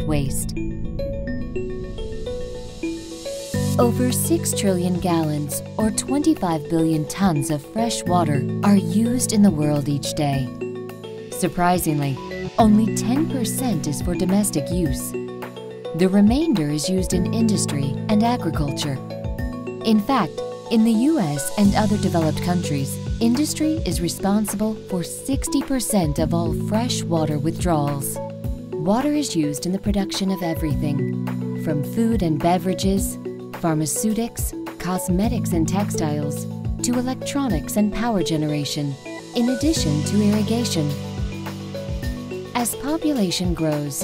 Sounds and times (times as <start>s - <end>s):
Speech: 0.0s - 0.6s, 3.7s - 10.5s, 11.4s - 15.2s, 16.0s - 19.0s, 19.8s - 28.2s, 28.8s - 41.0s, 42.6s - 44.0s
Music: 0.0s - 44.0s.